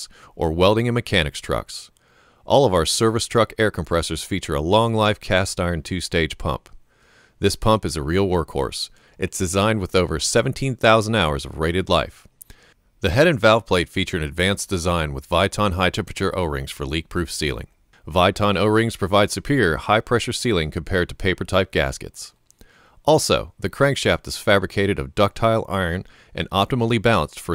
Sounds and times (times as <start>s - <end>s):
Speech: 0.0s - 1.9s, 2.5s - 6.8s, 7.4s - 12.3s, 13.0s - 22.4s, 23.0s - 27.5s.